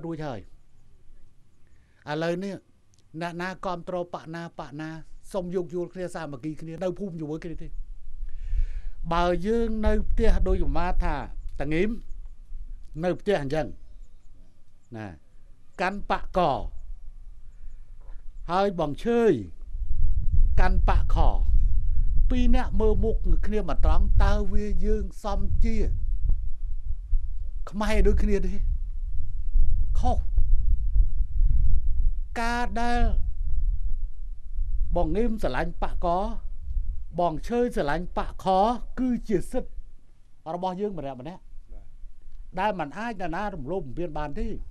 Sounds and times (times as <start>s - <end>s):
Male speech, man speaking: 0.0s - 0.5s, 2.1s - 2.6s, 3.2s - 7.7s, 9.1s - 12.0s, 13.0s - 13.8s, 14.9s - 15.2s, 15.8s - 16.7s, 18.5s - 19.6s, 20.6s - 21.5s, 22.3s - 26.0s, 27.7s - 28.7s, 30.0s - 30.3s, 32.4s - 33.2s, 35.0s - 36.4s, 37.2s - 39.7s, 40.5s - 41.4s, 42.6s - 44.6s
Narration, monologue: 0.0s - 34.0s, 34.8s - 44.7s.